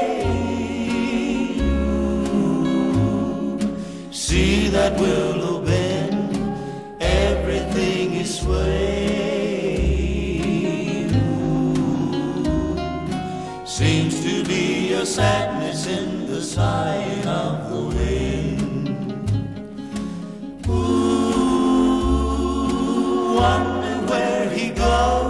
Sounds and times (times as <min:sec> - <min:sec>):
Music: 0:00.0 - 0:25.2.